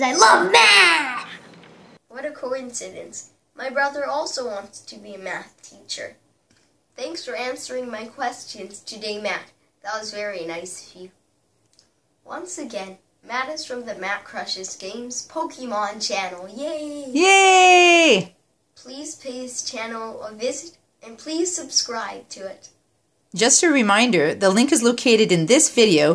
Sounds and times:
Inside, small room: 0:00.0 - 0:26.1.

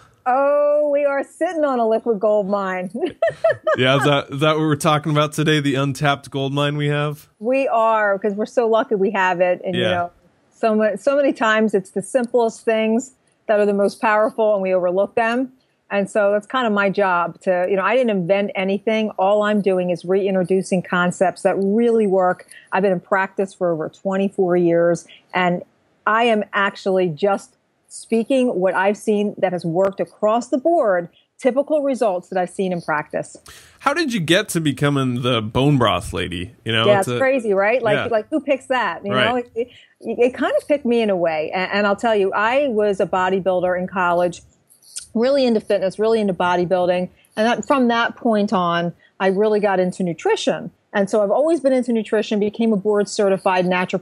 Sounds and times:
Speech: 0:00.0 - 0:44.4, 0:45.0 - 0:54.0.

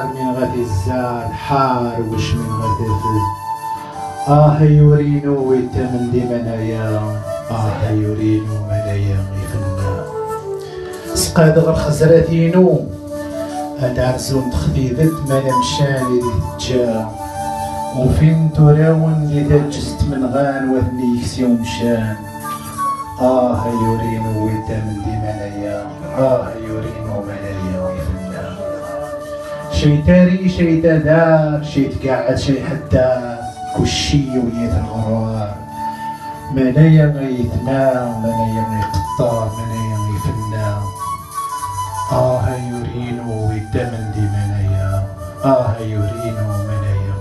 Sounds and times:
Speech: 0:00.0 - 0:03.3, 0:04.3 - 0:10.0, 0:11.2 - 0:12.9, 0:13.8 - 0:17.1, 0:17.9 - 0:22.2, 0:23.2 - 0:29.0, 0:29.7 - 0:35.6, 0:36.5 - 0:40.9, 0:42.1 - 0:47.0
Music: 0:00.0 - 0:47.2.

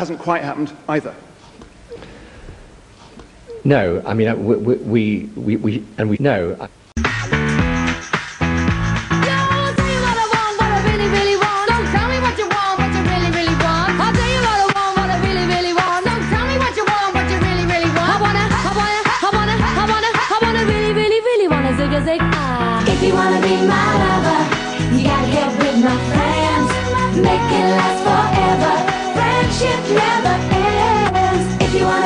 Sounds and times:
Pop music: 0:07.0 - 0:32.0.

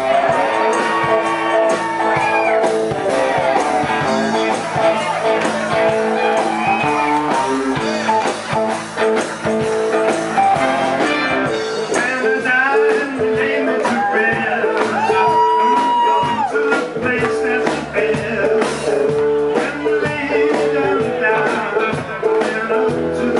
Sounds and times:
Music: 0:00.0 - 0:23.3.

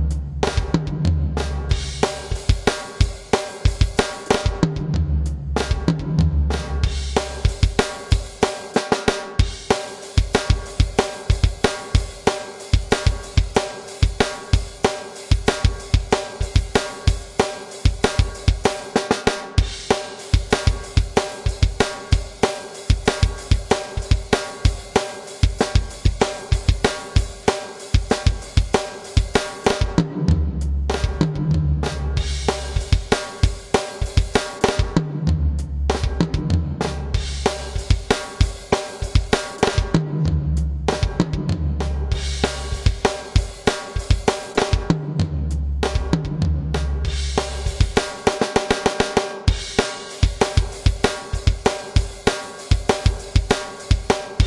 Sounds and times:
Drum: 0:00.0 - 0:54.4
Drum kit: 0:00.0 - 0:54.4.

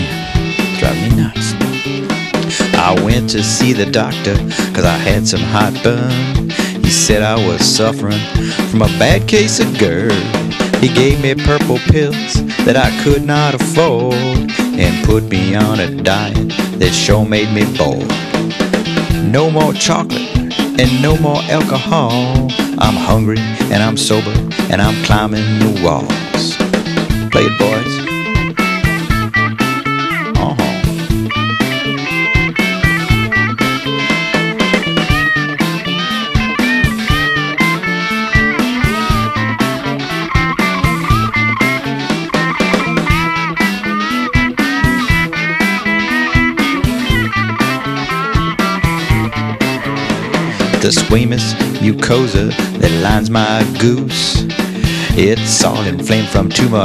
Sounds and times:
Speech: 0:00.0 - 0:01.6, 0:02.5 - 0:18.2, 0:19.2 - 0:26.6, 0:27.3 - 0:28.1, 0:30.3 - 0:30.9, 0:50.6 - 0:54.4, 0:55.1 - 0:56.8
Music: 0:00.0 - 0:56.8.

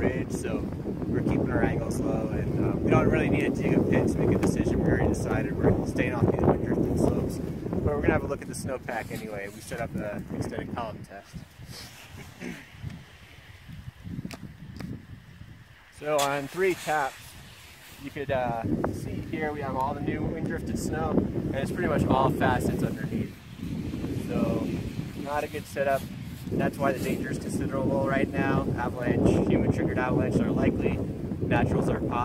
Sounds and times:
Speech: 0:00.0 - 0:00.6, 0:01.2 - 0:11.4, 0:16.0 - 0:17.2, 0:18.0 - 0:23.3, 0:24.2 - 0:32.2.

